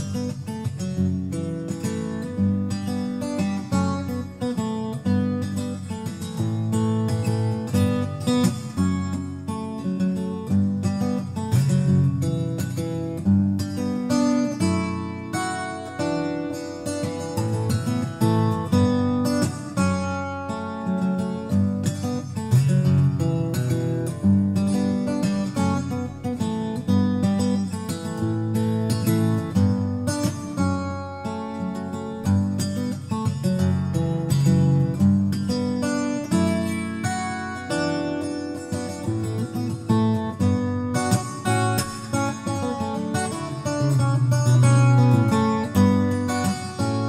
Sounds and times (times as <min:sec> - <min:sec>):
Strum: 0:00.0 - 0:47.0.